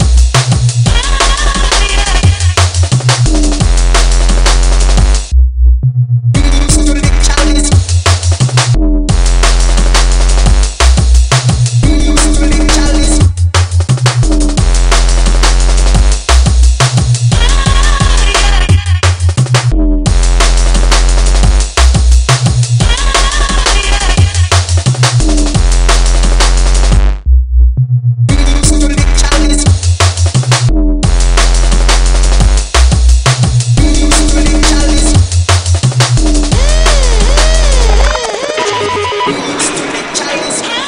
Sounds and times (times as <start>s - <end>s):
Drum and bass: 0.0s - 40.8s.